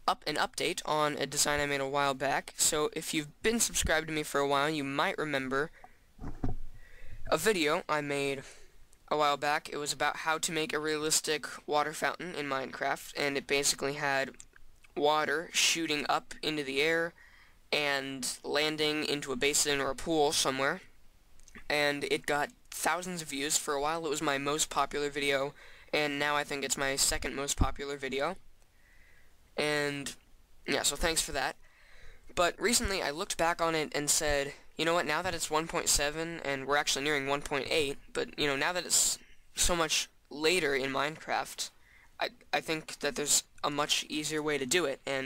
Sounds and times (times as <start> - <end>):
Speech: 0.0 - 5.7, 7.3 - 14.4, 15.0 - 20.9, 21.6 - 28.4, 29.6 - 31.6, 32.4 - 45.2.